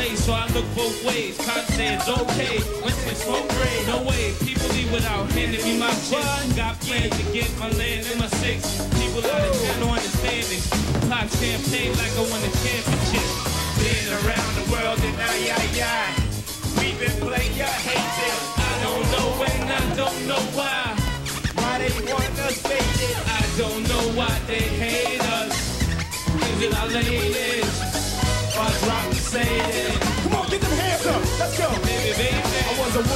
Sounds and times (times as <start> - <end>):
Music: 0.0 - 33.1.